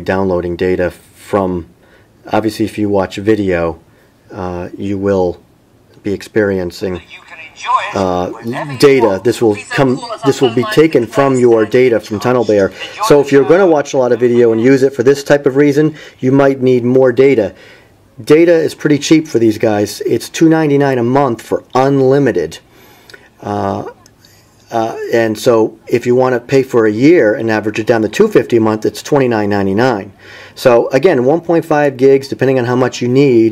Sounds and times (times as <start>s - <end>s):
Speech: 0.0s - 1.7s, 2.3s - 5.4s, 6.0s - 17.6s, 18.2s - 22.6s, 23.4s - 24.1s, 24.7s - 33.5s.